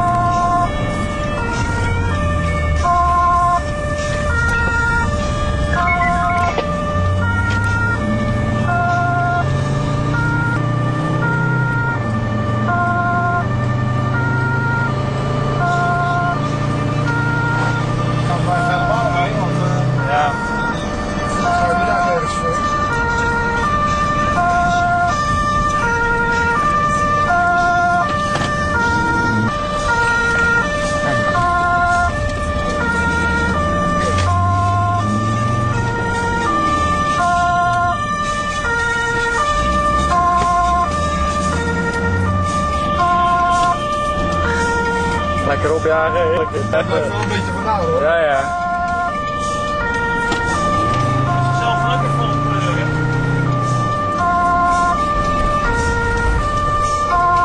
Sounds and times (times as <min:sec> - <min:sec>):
Ambulance (siren): 0:00.0 - 0:57.4.